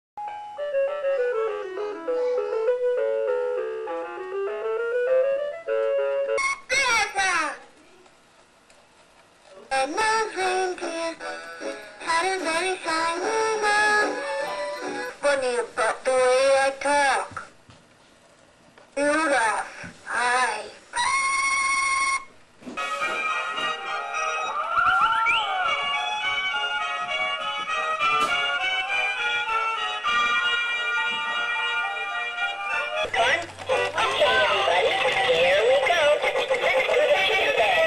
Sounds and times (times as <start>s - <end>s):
Christmas music: 0.2s - 7.1s, 10.0s - 16.2s, 22.8s - 37.8s
Christian music: 10.5s - 15.2s, 22.8s - 37.8s
Synthetic singing: 12.0s - 14.3s, 33.1s - 37.8s.